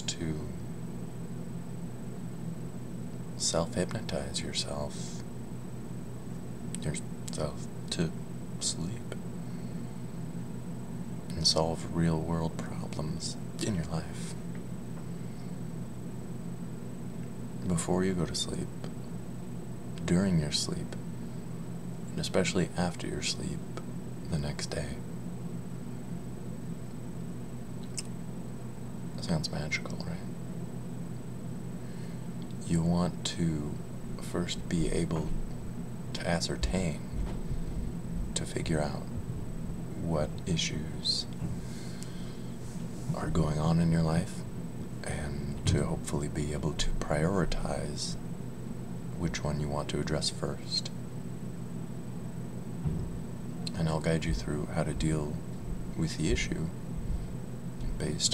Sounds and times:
Speech: 0.0s - 0.6s, 3.4s - 5.3s, 6.8s - 9.2s, 11.3s - 14.4s, 17.6s - 18.9s, 20.0s - 21.0s, 22.2s - 25.0s, 29.2s - 30.3s, 32.6s - 35.4s, 36.2s - 37.2s, 38.4s - 39.1s, 40.0s - 41.4s, 43.1s - 44.4s, 45.0s - 48.2s, 49.2s - 51.0s, 53.7s - 55.4s, 56.0s - 56.8s, 57.8s - 58.3s.

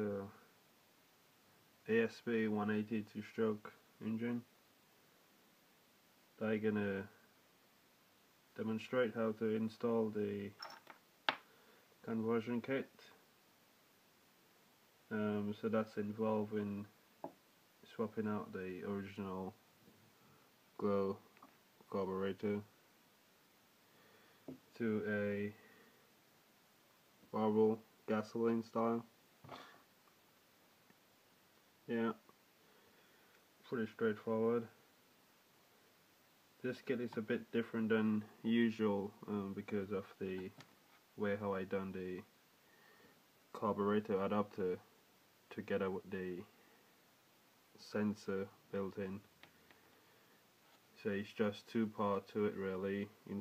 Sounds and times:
Speech: 0.0s - 0.5s, 1.8s - 4.5s, 6.4s - 7.2s, 8.6s - 10.6s, 12.0s - 13.2s, 15.1s - 16.9s, 17.8s - 19.6s, 20.8s - 21.2s, 21.9s - 22.7s, 24.7s - 25.6s, 27.3s - 29.1s, 31.9s - 32.2s, 33.6s - 34.8s, 36.6s - 40.6s, 41.2s - 42.3s, 43.5s - 44.9s, 45.5s - 46.5s, 47.8s - 49.3s, 51.0s - 53.4s.

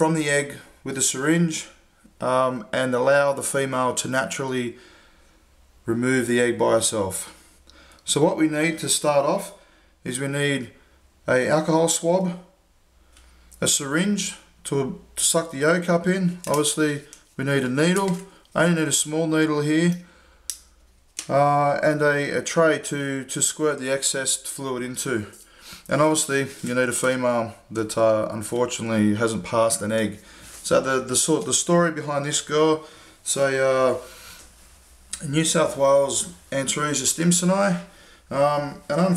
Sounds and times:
Speech: 0.0s - 4.8s, 5.9s - 7.4s, 8.1s - 12.6s, 13.6s - 20.1s, 21.2s - 34.1s, 35.2s - 39.1s
Inside, small room: 0.0s - 39.1s.

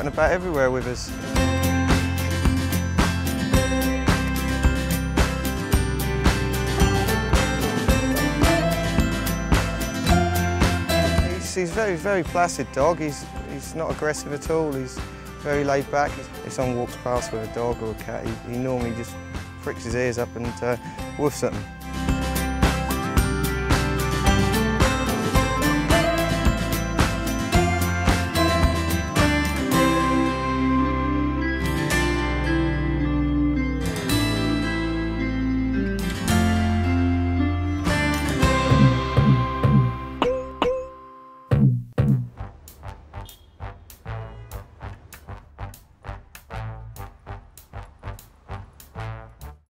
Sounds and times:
Music: 0.0s - 49.7s.

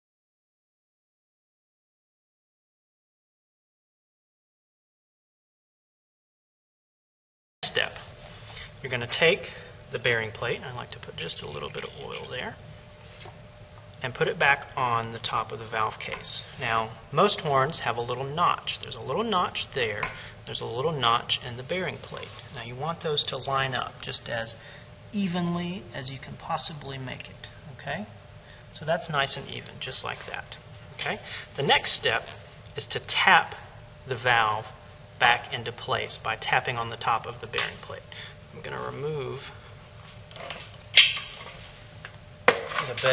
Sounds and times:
Speech: 7.6s - 8.0s, 8.8s - 12.6s, 14.0s - 28.2s, 28.8s - 39.6s, 42.8s - 43.1s.

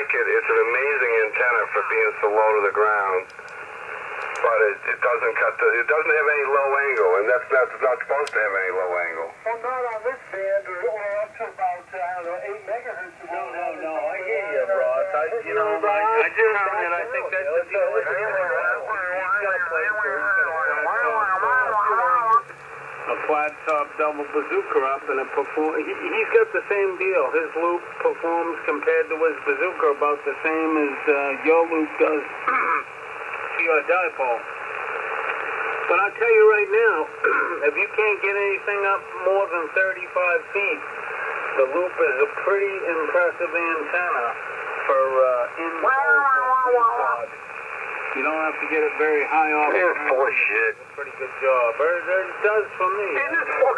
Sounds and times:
Speech: 0.0s - 3.3s, 4.4s - 22.5s, 23.1s - 32.5s, 33.5s - 34.4s, 35.9s - 40.9s, 41.5s - 47.3s, 48.1s - 53.7s
Radio: 0.0s - 53.7s.

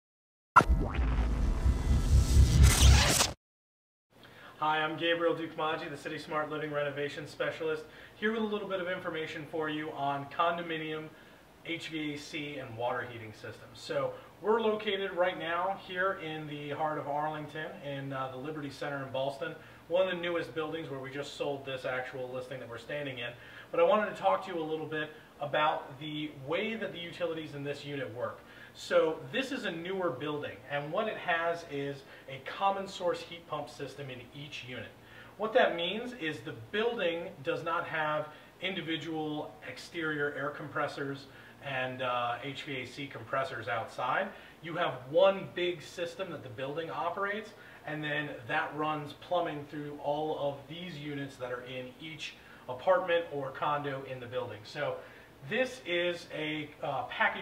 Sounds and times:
Speech: 4.6s - 57.4s.

